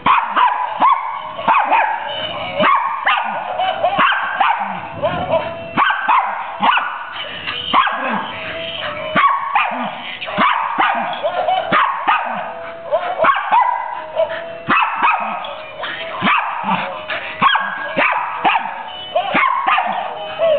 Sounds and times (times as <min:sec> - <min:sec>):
Yip: 0:00.0 - 0:07.1, 0:07.7 - 0:08.2, 0:09.2 - 0:20.5
Music: 0:00.0 - 0:20.5.